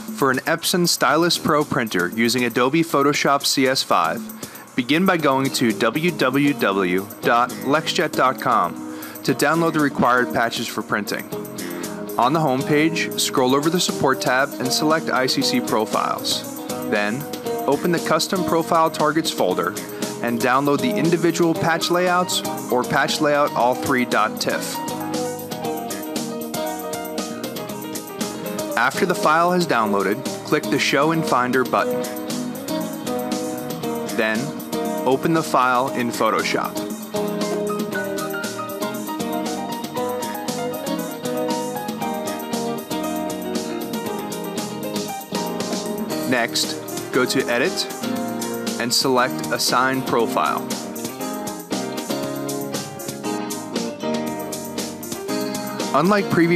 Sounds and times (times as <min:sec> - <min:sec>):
Music: 0:00.0 - 0:56.5
Speech: 0:00.2 - 0:11.3, 0:12.2 - 0:24.8, 0:28.7 - 0:32.0, 0:34.2 - 0:36.8, 0:46.3 - 0:47.9, 0:48.8 - 0:50.7, 0:55.9 - 0:56.5.